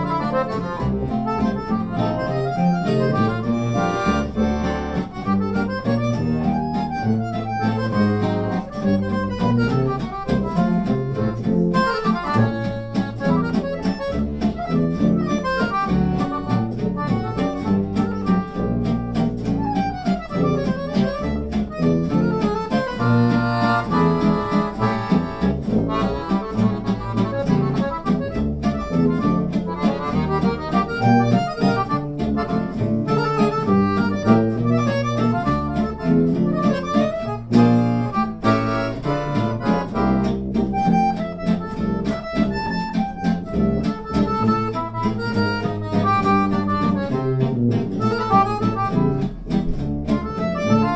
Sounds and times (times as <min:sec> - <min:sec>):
Music: 0:00.0 - 0:50.9.